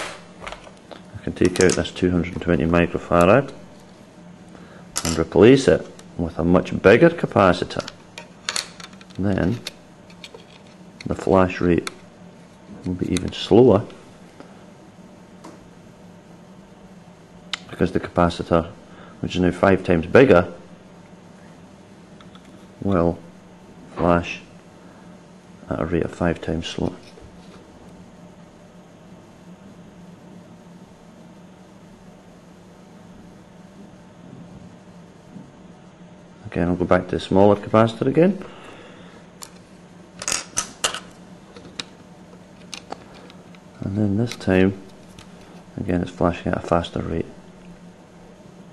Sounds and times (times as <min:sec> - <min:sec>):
Speech: 0:01.2 - 0:03.6, 0:05.0 - 0:07.9, 0:09.2 - 0:09.6, 0:11.0 - 0:12.0, 0:12.8 - 0:14.0, 0:17.7 - 0:20.6, 0:22.8 - 0:23.2, 0:23.9 - 0:24.5, 0:25.7 - 0:27.0, 0:36.4 - 0:38.4, 0:43.8 - 0:44.9, 0:45.8 - 0:47.4.